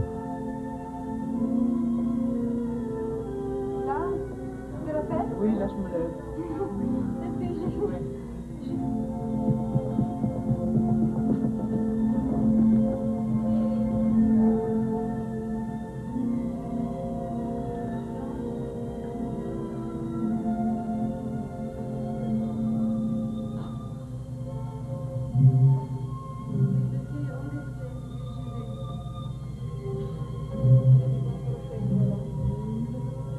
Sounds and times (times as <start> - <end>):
Inside, large room or hall: 0.0 - 33.3
Music: 0.0 - 33.3
Speech: 3.9 - 8.1, 26.8 - 28.8.